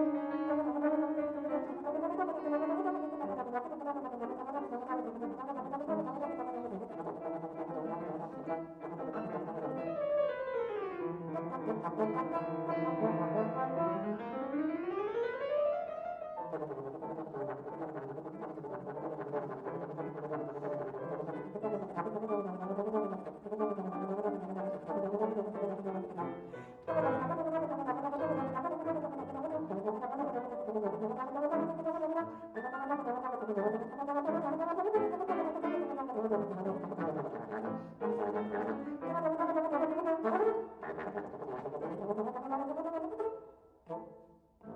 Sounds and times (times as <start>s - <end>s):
Brass instrument: 0.0s - 10.3s, 11.1s - 14.5s, 16.4s - 44.7s.